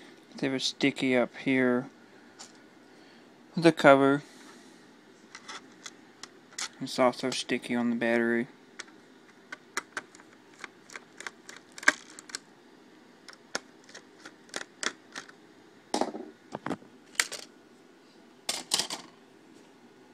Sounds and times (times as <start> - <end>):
Speech: 0.4 - 1.9, 3.6 - 4.3, 6.8 - 8.6.